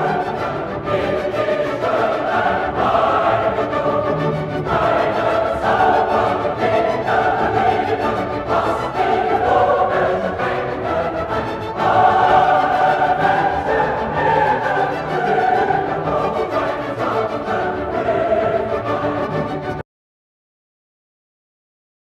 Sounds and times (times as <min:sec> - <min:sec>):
Music: 0:00.0 - 0:19.9.